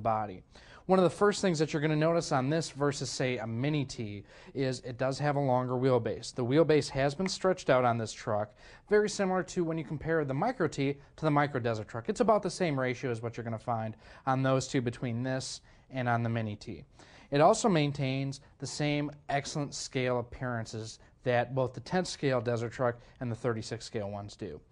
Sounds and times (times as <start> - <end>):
Speech: 0.0 - 24.7.